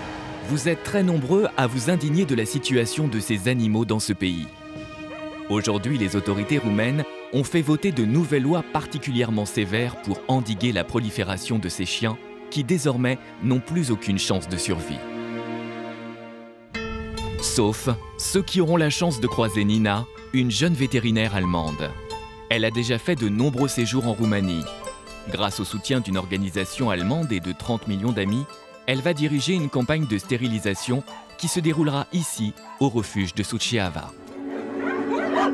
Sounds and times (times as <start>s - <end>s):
Music: 0.0s - 35.5s
Speech: 0.5s - 4.5s, 5.5s - 15.0s, 17.4s - 24.7s, 25.3s - 34.2s.